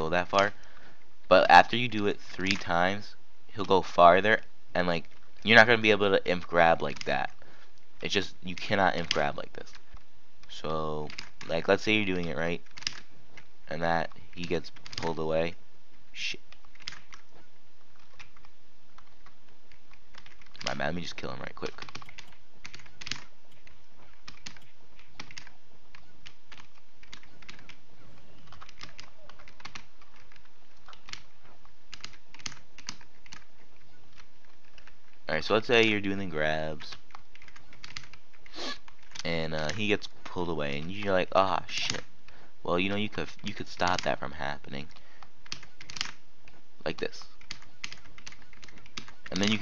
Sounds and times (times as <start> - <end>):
Speech: 0.0 - 0.5, 1.3 - 7.4, 8.0 - 9.7, 10.5 - 12.6, 13.7 - 15.6, 16.2 - 16.4, 20.6 - 21.8, 35.3 - 37.0, 39.2 - 44.9, 46.8 - 47.3, 49.3 - 49.6
Computer keyboard: 21.6 - 31.3, 31.9 - 35.0, 37.0 - 39.8, 44.9 - 46.2, 47.0 - 49.6.